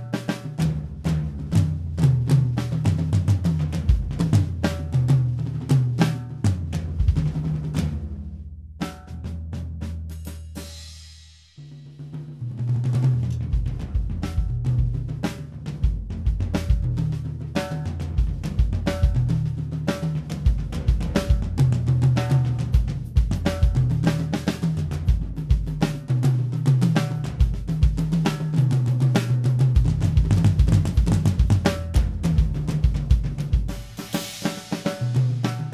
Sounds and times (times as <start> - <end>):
Bass drum: 0.0 - 35.7
Drum kit: 0.0 - 35.7.